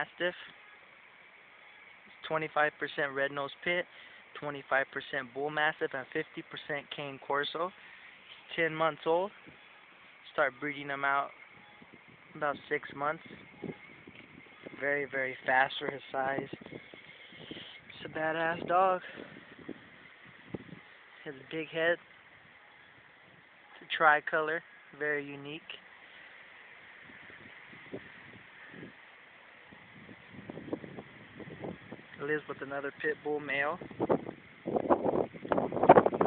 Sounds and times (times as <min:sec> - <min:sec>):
Speech: 0:00.0 - 0:00.5, 0:02.2 - 0:07.7, 0:08.5 - 0:09.4, 0:10.3 - 0:11.3, 0:12.4 - 0:13.3, 0:14.8 - 0:16.6, 0:17.9 - 0:19.2, 0:21.2 - 0:22.0, 0:23.8 - 0:25.8, 0:32.2 - 0:33.8.